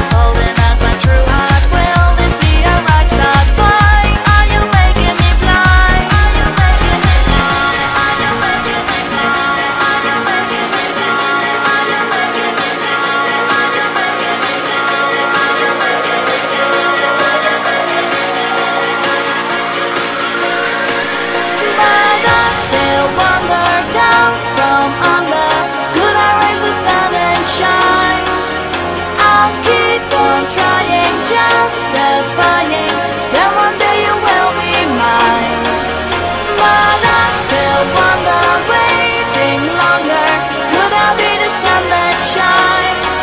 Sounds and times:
Music: 0.0 - 43.2.

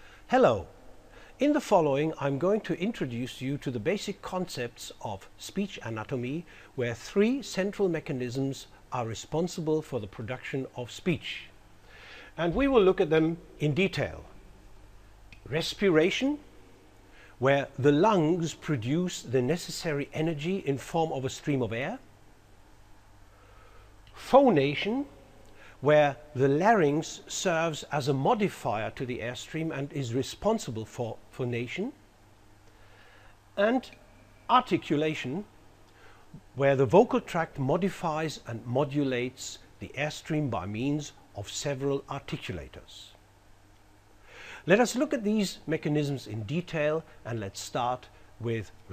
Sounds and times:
Narration, monologue: 0.0 - 48.9
Male speech, man speaking: 0.3 - 0.6, 1.4 - 11.5, 12.4 - 14.3, 15.5 - 16.4, 17.4 - 22.0, 24.2 - 25.1, 25.8 - 32.0, 33.6 - 35.5, 36.6 - 43.2, 44.7 - 48.8.

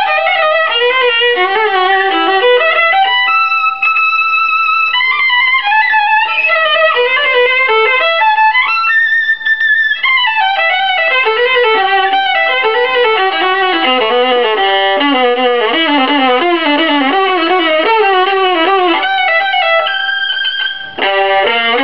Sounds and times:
Violin, fiddle: 0.0 - 21.8.

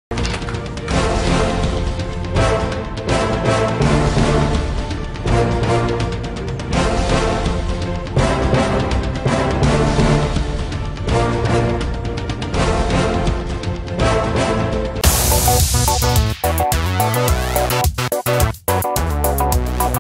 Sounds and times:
Music: 0.1 - 20.0.

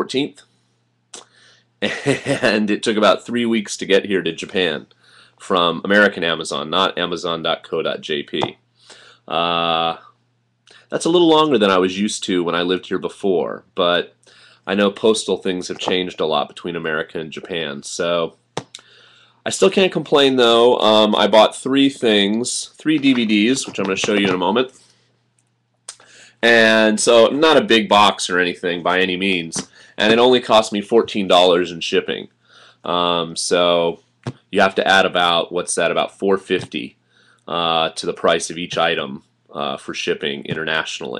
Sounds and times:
Speech: 0.0 - 0.5, 1.8 - 8.6, 9.3 - 18.4, 19.4 - 24.8, 26.4 - 41.1.

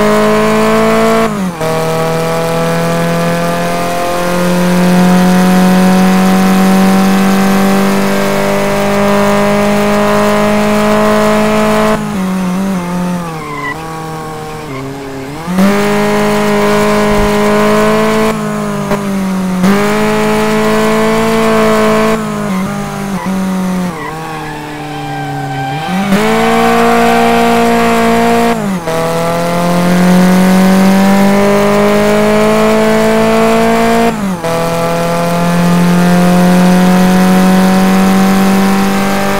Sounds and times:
Race car, auto racing: 0.0 - 39.3.

